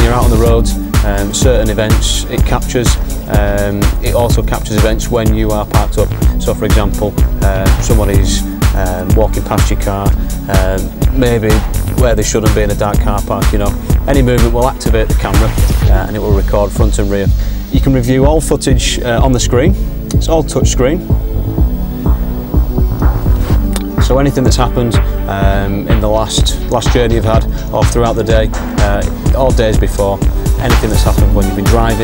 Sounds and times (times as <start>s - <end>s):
Speech: 0.0s - 21.1s, 24.0s - 32.0s
Music: 0.0s - 32.0s.